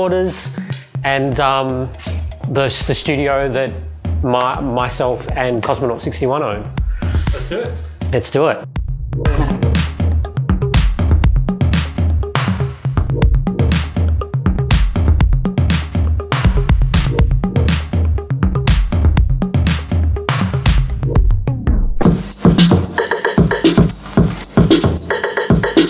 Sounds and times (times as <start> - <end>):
Speech: 0.0 - 8.7, 9.3 - 9.7
Music: 0.0 - 25.9.